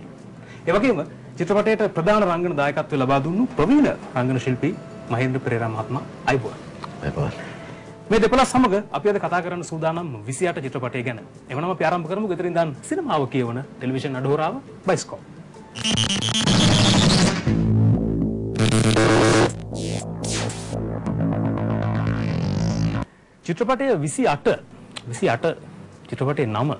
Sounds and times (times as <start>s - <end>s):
Music: 0.0s - 23.1s, 24.3s - 26.7s
Speech: 8.1s - 15.2s, 23.5s - 26.7s.